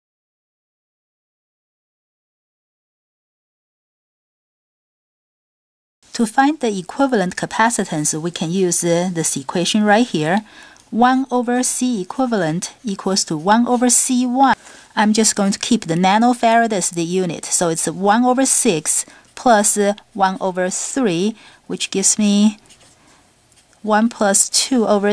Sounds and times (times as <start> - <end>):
Speech: 6.1 - 22.6, 23.8 - 25.1.